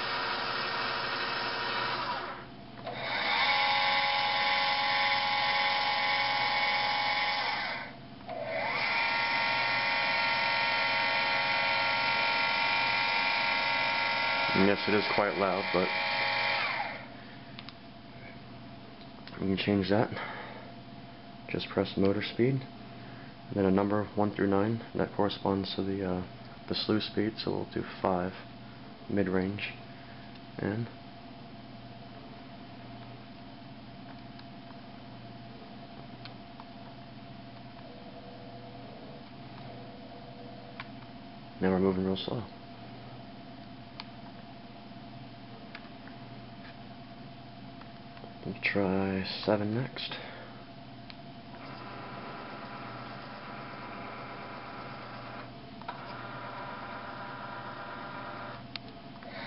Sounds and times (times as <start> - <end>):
Speech: 14.6 - 15.9, 19.4 - 20.2, 21.5 - 22.7, 23.5 - 28.5, 29.1 - 29.8, 30.6 - 31.0, 41.6 - 42.6, 48.4 - 50.3.